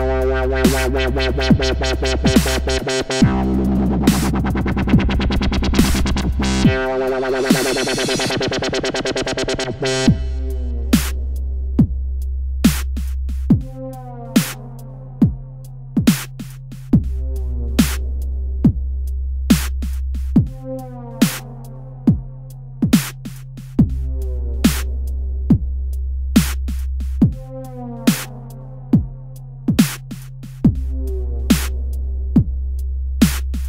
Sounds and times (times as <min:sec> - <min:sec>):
Dubstep: 0:00.0 - 0:11.5, 0:12.7 - 0:14.9, 0:16.0 - 0:18.4, 0:19.5 - 0:21.8, 0:22.8 - 0:25.2, 0:26.4 - 0:28.6, 0:29.7 - 0:32.1, 0:33.2 - 0:33.6
Drum machine: 0:00.0 - 0:12.0, 0:12.6 - 0:15.4, 0:16.0 - 0:33.6.